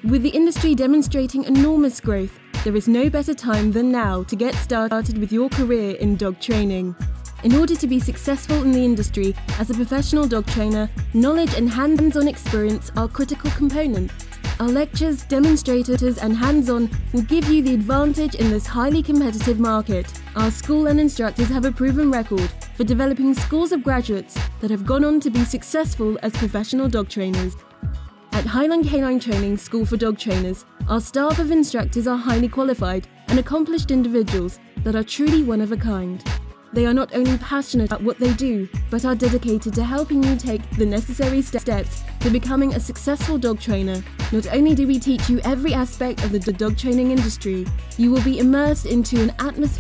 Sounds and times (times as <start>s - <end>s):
Speech: 0.0s - 27.6s, 28.3s - 36.2s, 36.8s - 49.8s
Music: 0.0s - 49.8s.